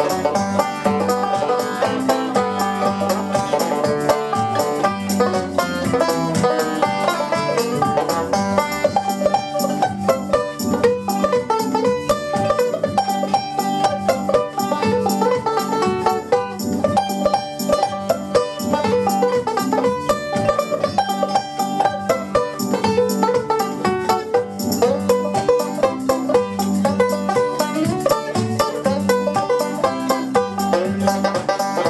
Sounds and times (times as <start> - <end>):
Banjo: 0.0 - 31.9.